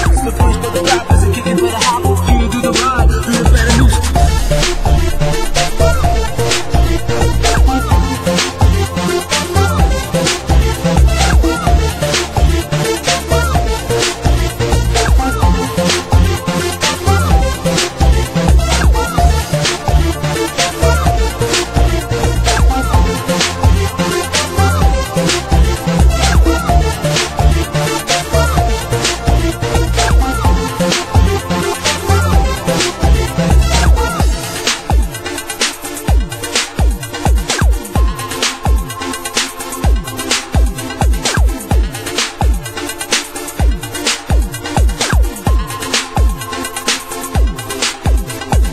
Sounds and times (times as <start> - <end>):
Music: 0.0 - 48.7.